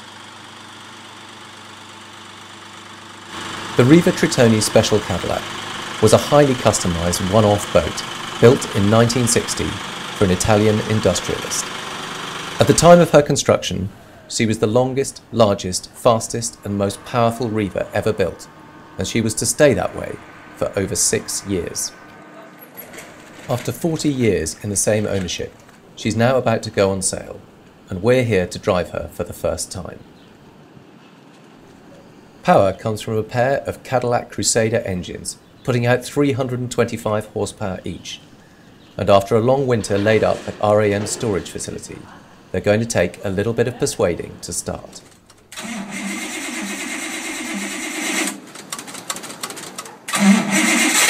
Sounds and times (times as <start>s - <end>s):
Speech: 3.8s - 5.4s, 6.0s - 11.6s, 12.6s - 22.8s, 23.5s - 30.0s, 32.4s - 38.2s, 39.0s - 45.1s.